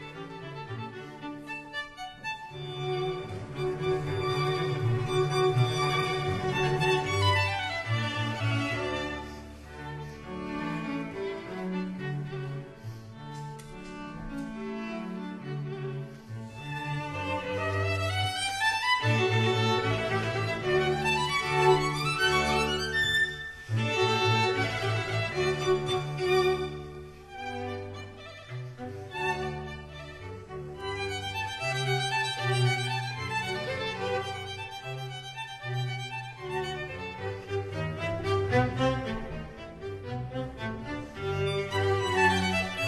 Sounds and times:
Violin, fiddle: 0.0 - 42.8.

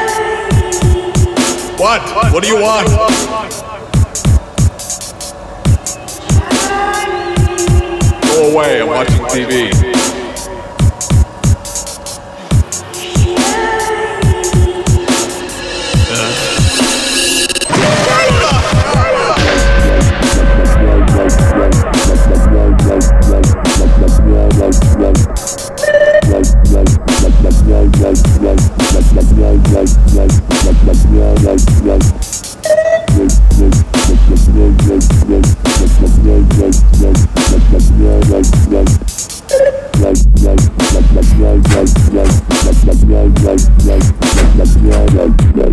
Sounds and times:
Dubstep: 0.0 - 45.7.

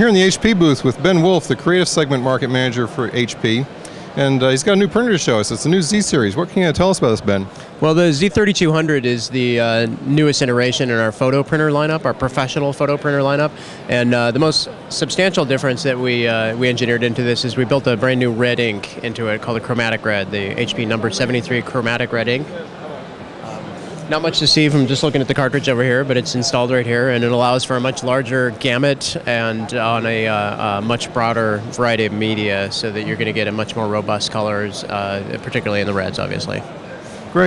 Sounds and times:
Speech: 0.0 - 22.7, 23.4 - 36.7.

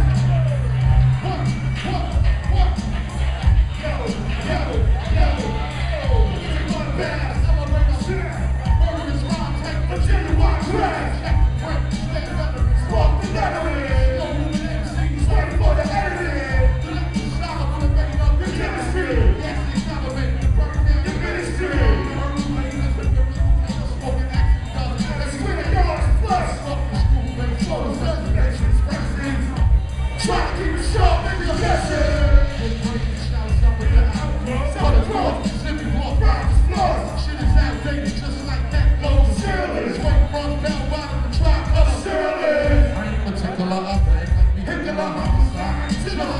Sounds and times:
Dance music: 0.0 - 46.3.

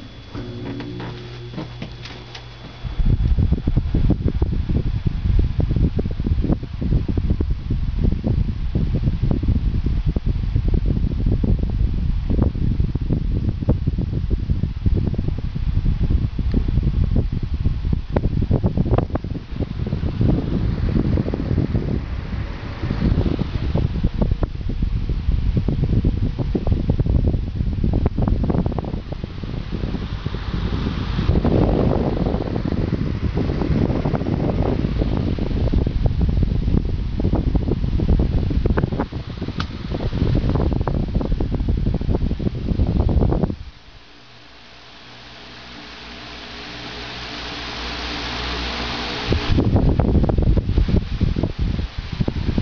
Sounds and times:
Mechanical fan: 0.0 - 52.6.

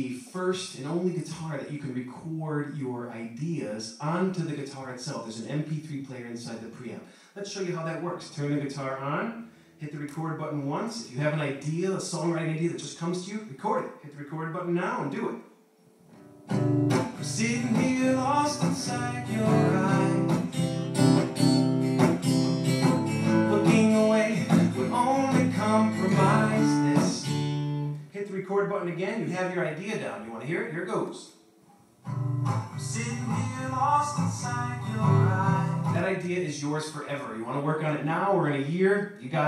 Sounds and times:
Speech: 0.0 - 15.5, 28.1 - 31.4, 35.9 - 39.4
Acoustic guitar: 13.8 - 30.4, 31.4 - 38.7
Strum: 16.1 - 28.1.

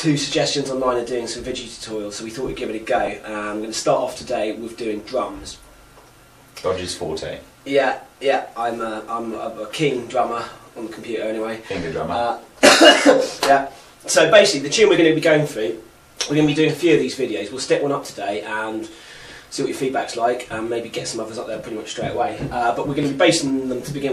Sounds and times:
Speech: 0.0 - 5.6, 6.6 - 12.5, 13.4 - 18.9, 19.5 - 24.1.

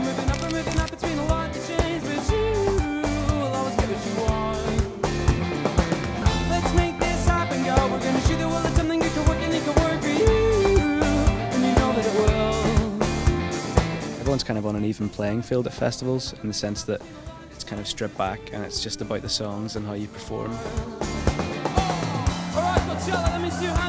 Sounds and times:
Music: 0.0 - 23.8.

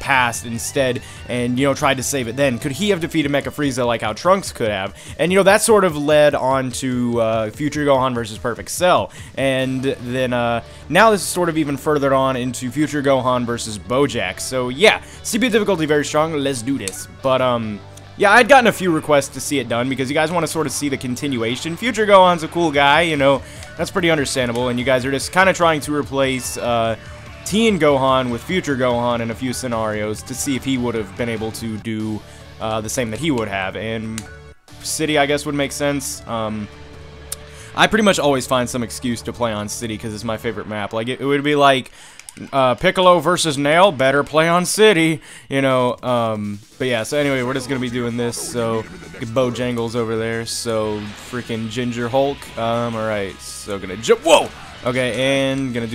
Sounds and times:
Speech: 0.0 - 36.7, 37.7 - 55.9
Music: 0.0 - 55.9.

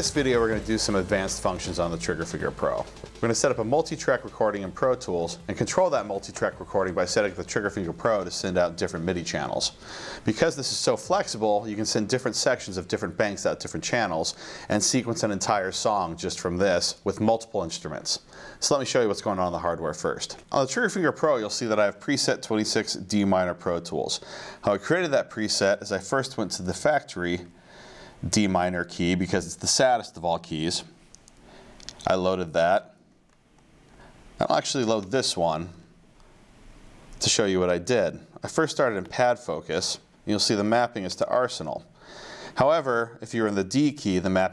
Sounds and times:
Speech: 0.0 - 27.5, 28.2 - 31.0, 31.9 - 33.0, 34.4 - 35.9, 37.2 - 41.9, 42.6 - 44.5.

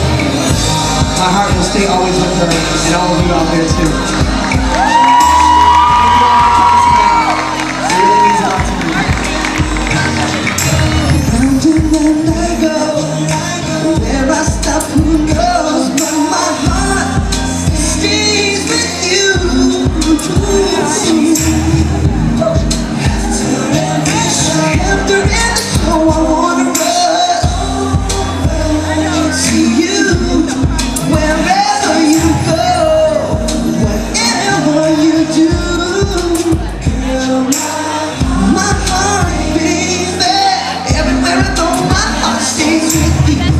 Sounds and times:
Crowd: 0.0 - 43.5
Music: 0.0 - 43.5
Singing: 0.0 - 43.5.

